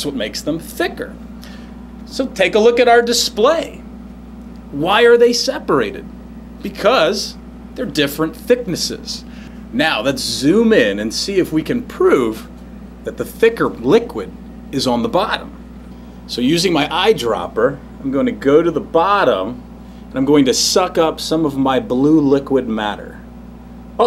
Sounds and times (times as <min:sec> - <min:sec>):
Speech: 0:00.0 - 0:01.2, 0:02.1 - 0:03.8, 0:04.7 - 0:15.6, 0:16.3 - 0:23.3.